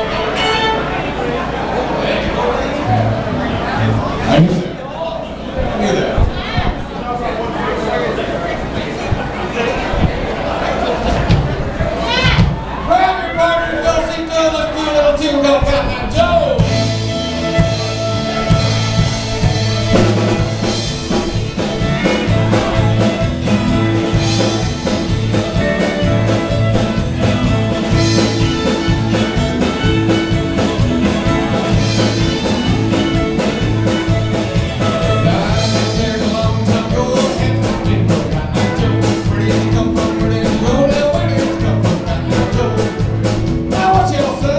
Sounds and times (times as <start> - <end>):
Violin, fiddle: 0.0 - 1.4, 16.7 - 35.6.